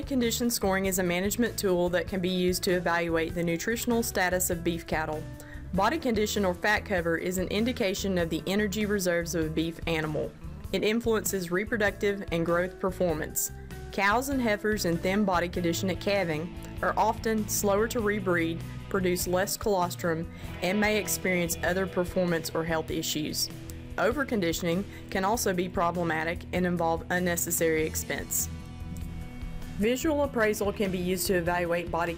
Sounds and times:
Speech: 0:00.0 - 0:28.5, 0:29.8 - 0:32.1
Music: 0:00.0 - 0:32.1.

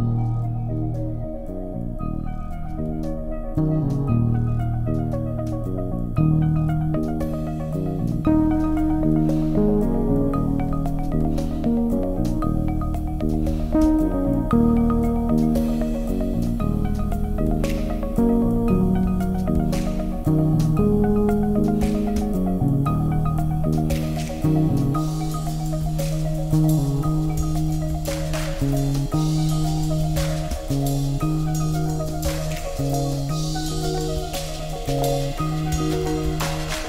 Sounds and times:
Music: 0:00.0 - 0:36.8.

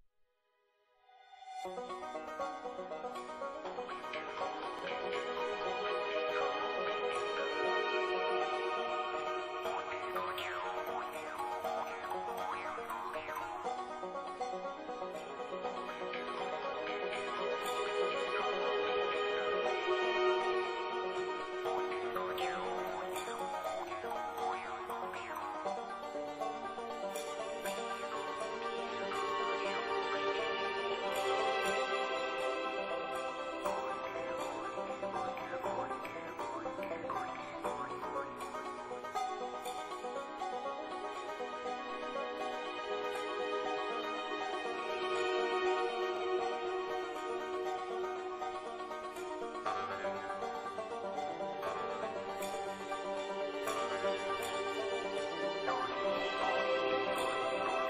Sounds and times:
Music: 0:00.4 - 0:57.9.

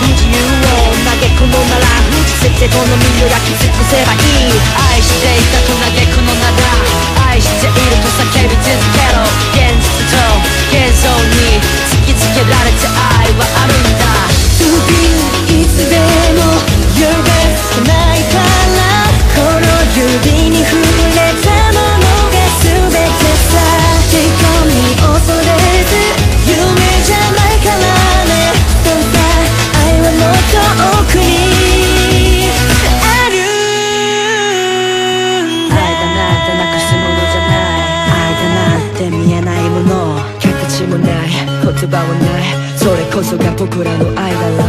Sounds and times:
Music: 0:00.0 - 0:44.6.

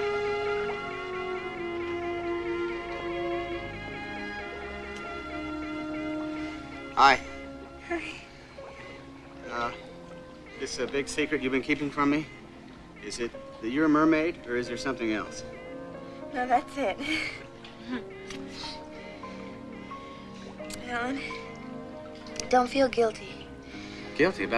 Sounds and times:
Music: 0:00.0 - 0:24.5
Water: 0:00.0 - 0:24.5.

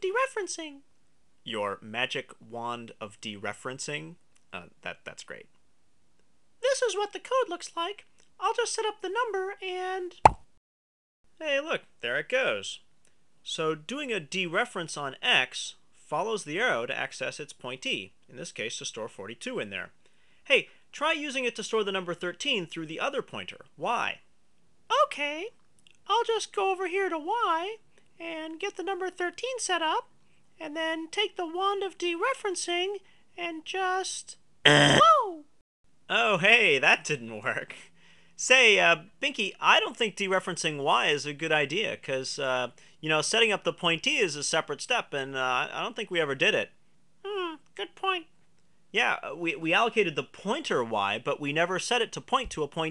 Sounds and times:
Narration, monologue: 0:00.0 - 0:10.6, 0:11.3 - 0:52.9.

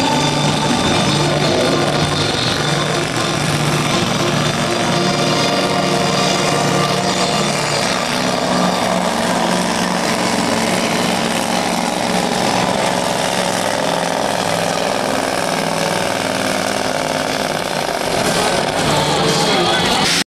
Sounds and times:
Truck: 0:00.0 - 0:20.2.

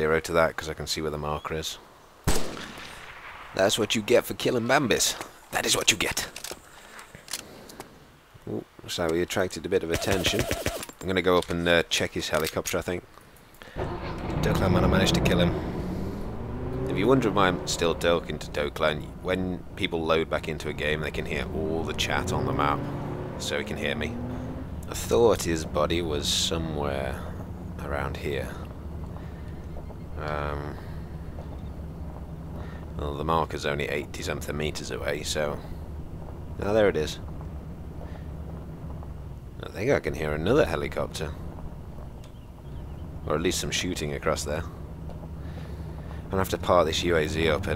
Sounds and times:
Vehicle: 0:09.9 - 0:47.7.

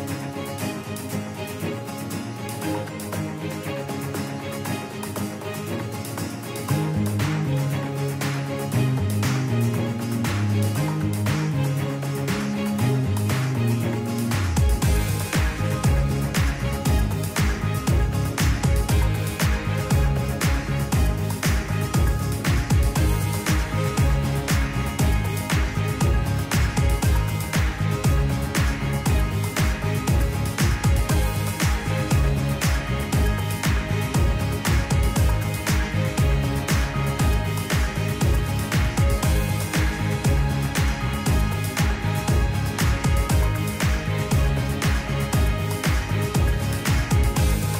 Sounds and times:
Music: 0:00.0 - 0:47.7.

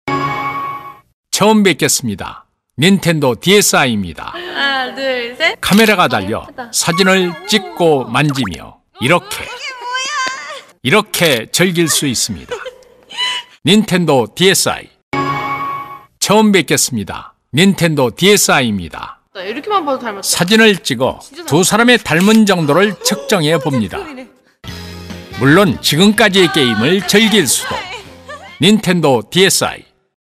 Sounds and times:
Music: 0:00.1 - 0:01.1, 0:15.2 - 0:16.1, 0:24.6 - 0:28.6
Speech: 0:01.4 - 0:12.6, 0:13.6 - 0:15.0, 0:16.2 - 0:24.3, 0:25.4 - 0:28.0, 0:28.6 - 0:29.9.

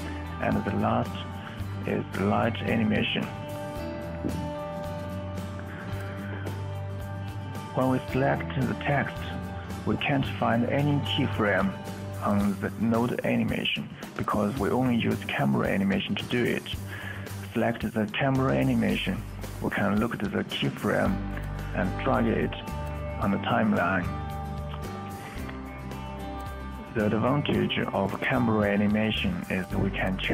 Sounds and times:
Music: 0:00.0 - 0:30.3
Speech: 0:00.4 - 0:03.4, 0:07.7 - 0:24.2, 0:27.0 - 0:30.3.

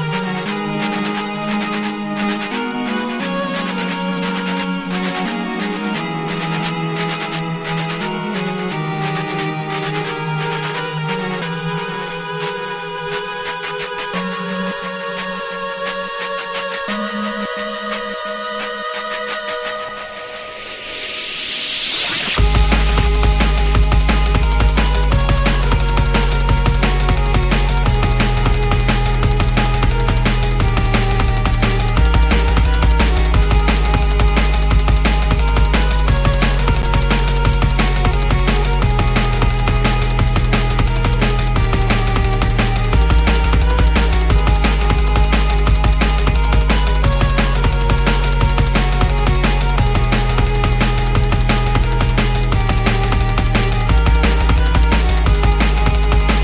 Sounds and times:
Music: 0:00.0 - 0:56.4.

